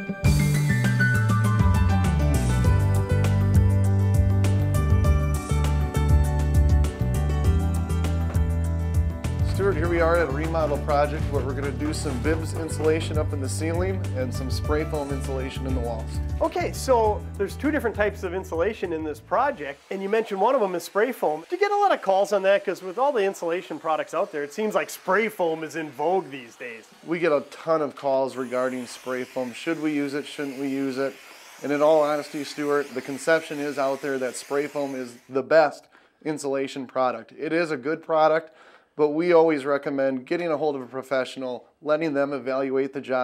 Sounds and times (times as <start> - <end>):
Speech: 9.4 - 43.2
Spray: 19.5 - 35.4.